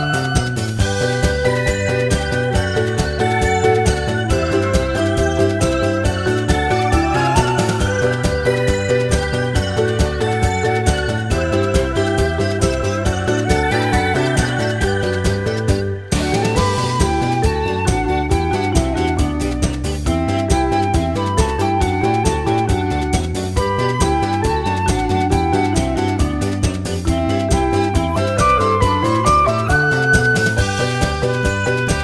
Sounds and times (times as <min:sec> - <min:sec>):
Music: 0:00.0 - 0:32.0.